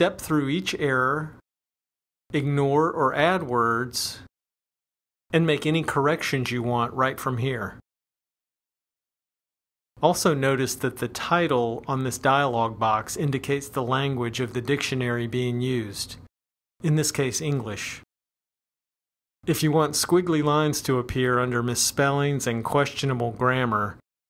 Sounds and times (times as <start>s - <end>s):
Speech: 0.0s - 1.4s, 2.3s - 4.3s, 5.3s - 7.8s, 10.0s - 18.1s, 19.5s - 24.0s.